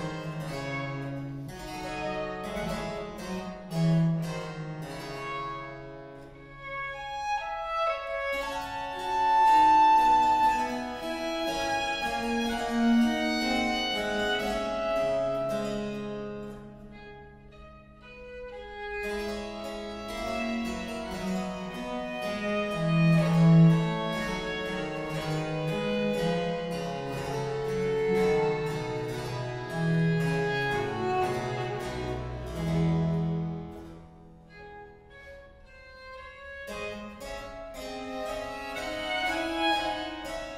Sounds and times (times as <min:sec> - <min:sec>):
Violin, fiddle: 0:00.0 - 0:33.9, 0:34.5 - 0:40.5.